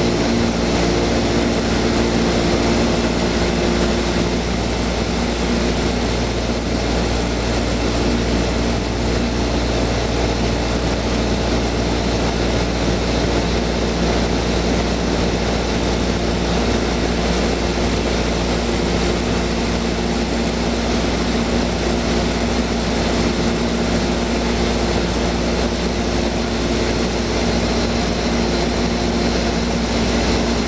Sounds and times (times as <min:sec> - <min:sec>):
Outside, urban or manmade: 0:00.0 - 0:30.6
Propeller, airscrew: 0:00.0 - 0:30.6.